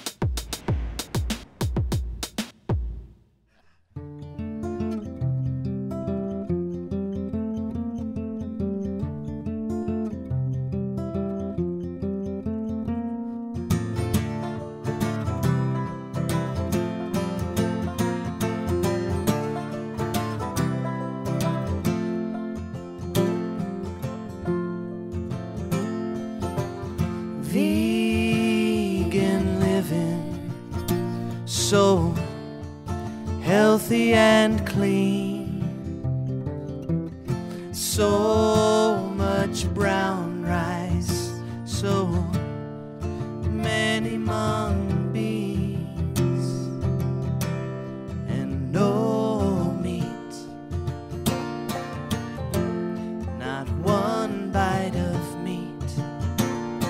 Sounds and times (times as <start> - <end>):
Music: 0.0 - 56.9.